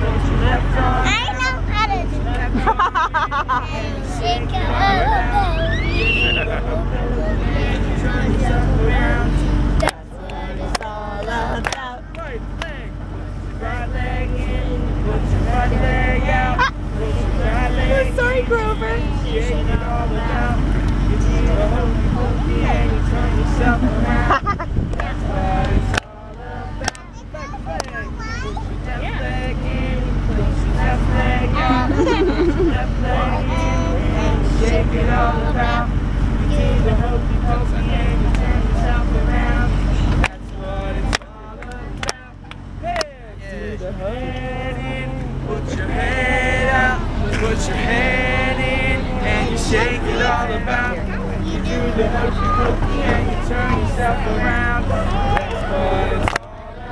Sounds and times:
Male singing: 0.0s - 56.9s.

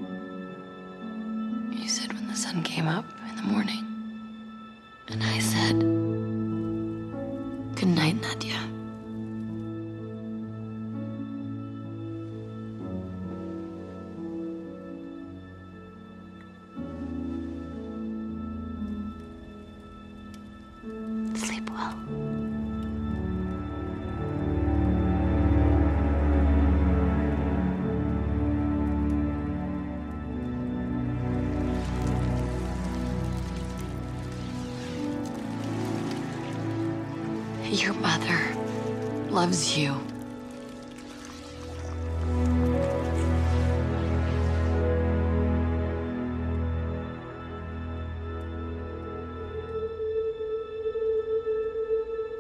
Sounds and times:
Music: 0.0s - 52.4s.

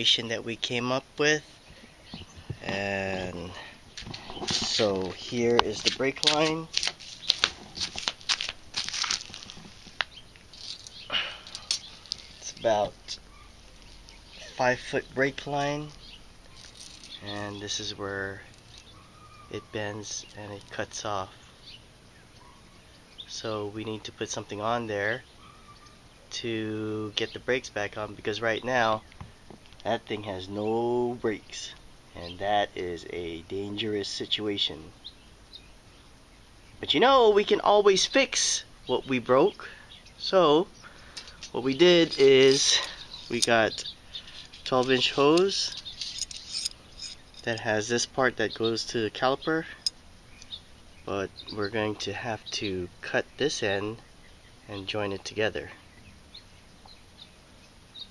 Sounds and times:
Chirp, tweet: 1.5s - 5.1s, 10.1s - 26.1s, 30.2s - 32.5s, 38.8s - 58.1s.

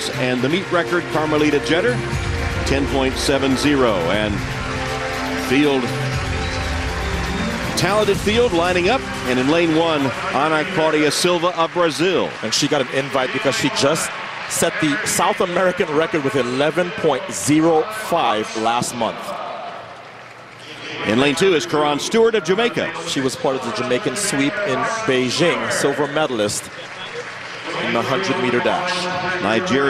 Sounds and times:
Speech: 0.0s - 2.0s, 2.7s - 4.4s, 5.4s - 6.0s, 7.8s - 19.5s, 20.8s - 26.8s, 27.6s - 29.8s
Music: 0.0s - 17.0s.

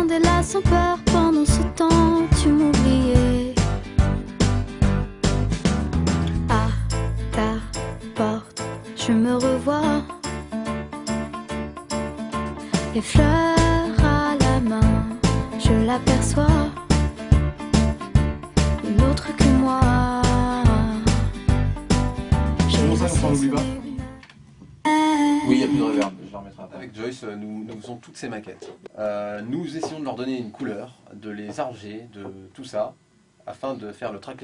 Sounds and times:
Music: 0.0s - 24.3s.

